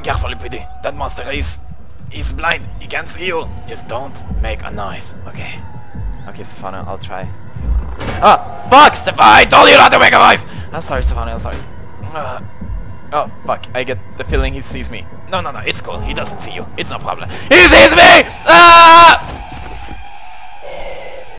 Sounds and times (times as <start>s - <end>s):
Music: 0.0s - 21.3s.